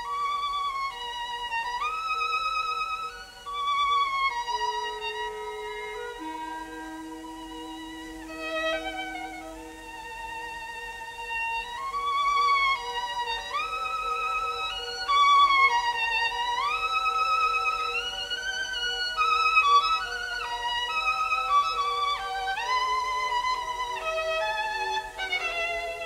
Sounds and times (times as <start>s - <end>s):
Violin, fiddle: 0.0s - 26.0s.